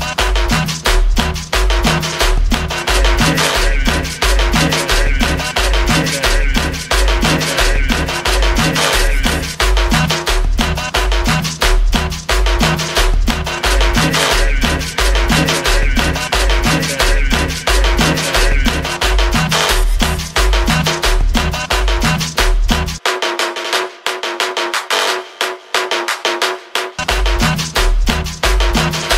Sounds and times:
Electronica: 0.0s - 26.1s, 26.9s - 29.1s.

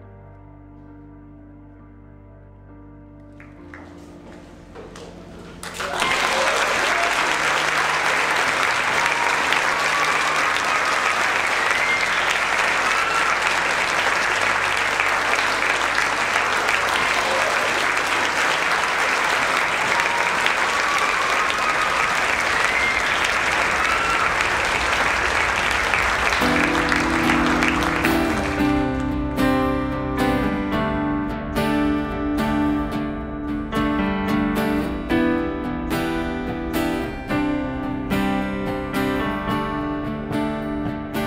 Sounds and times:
Music: 0.0s - 41.2s
Applause: 3.4s - 4.4s, 5.6s - 29.7s.

